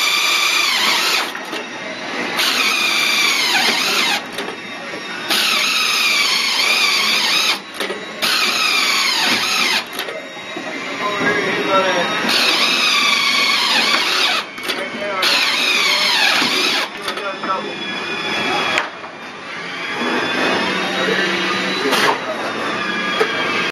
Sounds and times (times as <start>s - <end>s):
Speech: 10.0s - 12.3s, 14.7s - 17.9s, 20.8s - 22.7s.